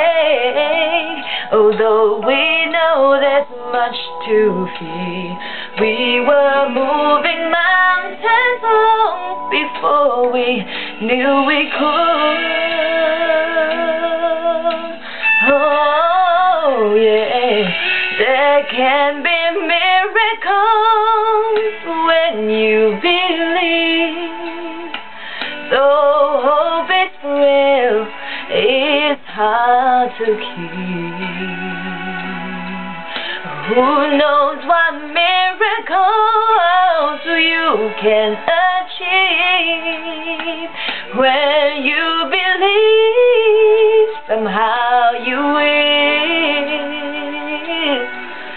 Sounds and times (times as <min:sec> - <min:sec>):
Female singing: 0:00.0 - 0:25.0, 0:25.7 - 0:32.3, 0:33.6 - 0:48.3.